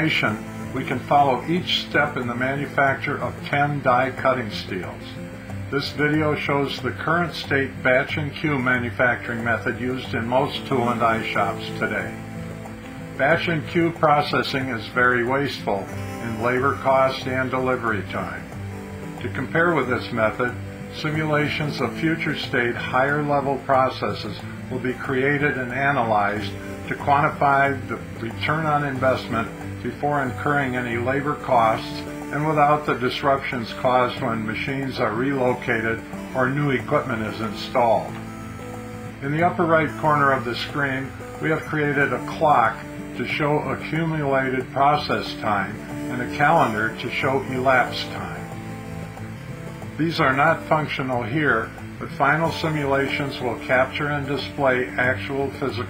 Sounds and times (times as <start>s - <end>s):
Speech: 0.0s - 12.2s, 13.2s - 18.5s, 19.2s - 38.2s, 39.2s - 48.6s, 49.9s - 55.8s
Music: 0.0s - 55.8s.